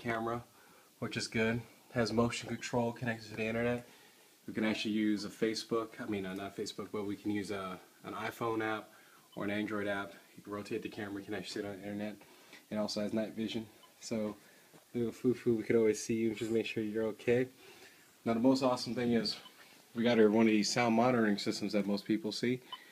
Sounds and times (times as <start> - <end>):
Speech: 0.0 - 3.9, 4.5 - 17.6, 18.2 - 22.6.